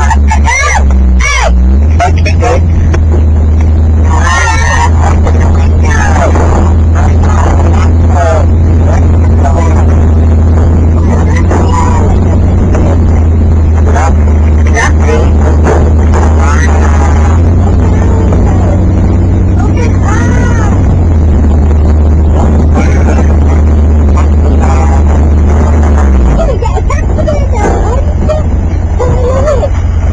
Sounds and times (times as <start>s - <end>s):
Speech: 0.0s - 2.7s, 4.1s - 10.0s, 11.0s - 13.2s, 13.8s - 15.6s, 16.2s - 18.8s, 19.6s - 20.9s, 22.8s - 25.1s, 26.3s - 29.7s
Car: 0.0s - 30.1s.